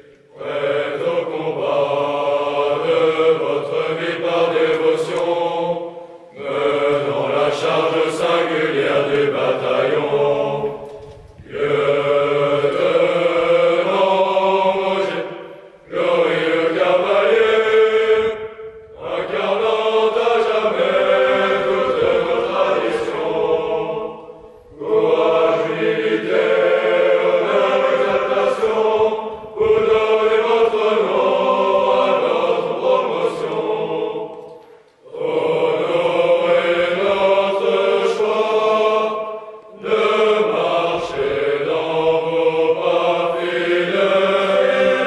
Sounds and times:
Mantra: 0.0s - 45.0s.

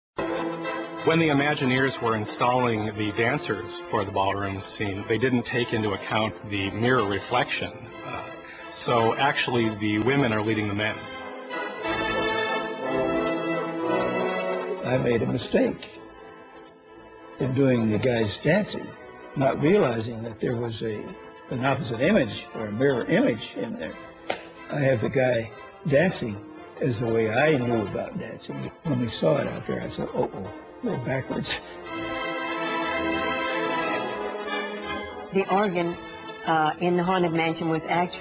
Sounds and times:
Speech: 1.0s - 11.1s, 14.8s - 15.9s, 17.4s - 24.0s, 24.7s - 31.7s, 35.4s - 38.2s.

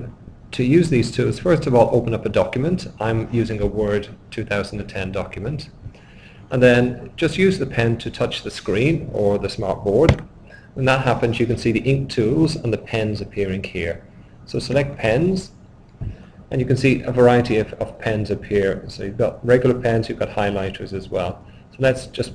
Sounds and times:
Speech: 0.0s - 5.8s, 6.5s - 10.2s, 10.8s - 15.5s, 16.5s - 22.3s.

